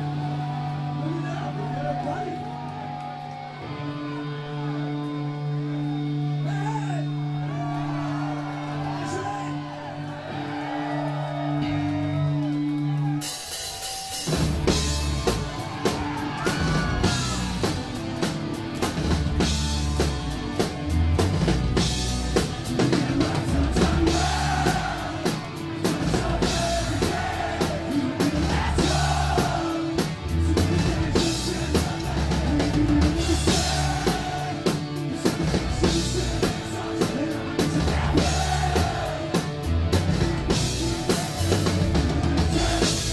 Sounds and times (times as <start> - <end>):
Music: 0.0 - 43.1.